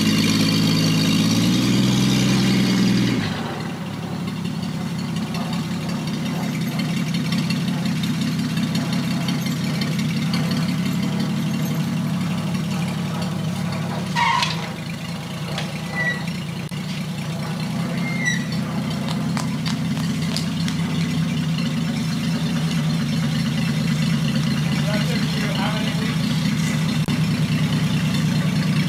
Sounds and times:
Car: 0.0 - 28.8
Truck: 0.0 - 28.8.

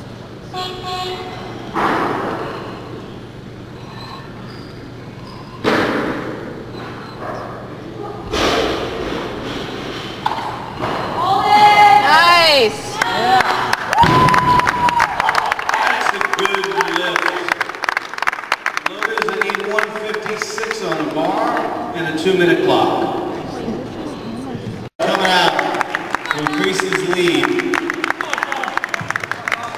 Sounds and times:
Thump, thud: 1.8 - 2.4, 5.6 - 6.4, 8.3 - 9.9, 14.0 - 14.6.

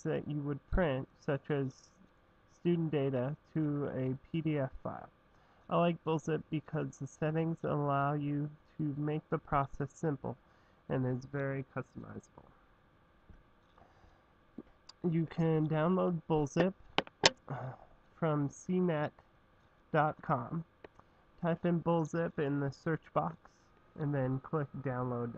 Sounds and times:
Speech: 0.0 - 12.5, 14.9 - 16.8, 17.5 - 19.2, 20.0 - 20.7, 21.4 - 25.3.

